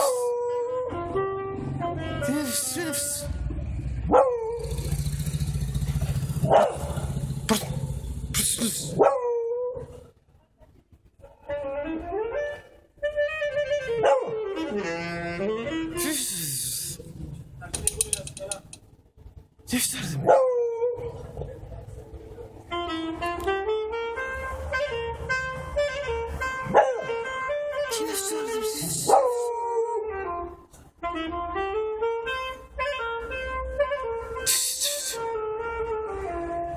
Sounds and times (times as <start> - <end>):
Saxophone: 0.7 - 3.4, 11.5 - 17.4, 22.6 - 29.2, 30.0 - 36.7
Brass instrument: 0.8 - 3.3, 11.5 - 17.1, 22.6 - 36.7.